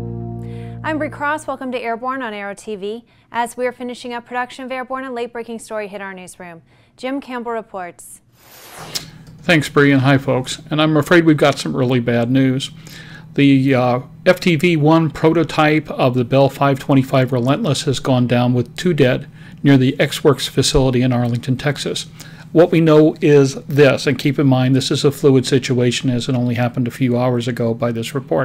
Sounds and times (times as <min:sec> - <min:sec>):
Speech: 0:00.9 - 0:08.2, 0:09.4 - 0:12.8, 0:13.4 - 0:28.4.